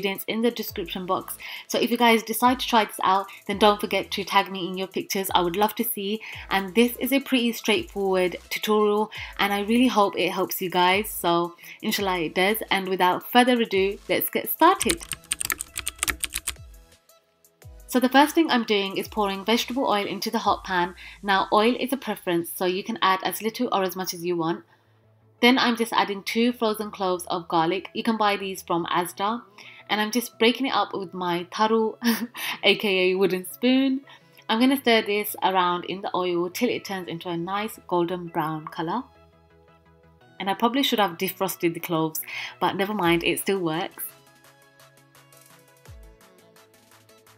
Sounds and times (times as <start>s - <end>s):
Speech: 0.0s - 15.1s, 17.9s - 24.6s, 25.4s - 39.1s, 40.4s - 44.1s
Music: 0.0s - 47.3s.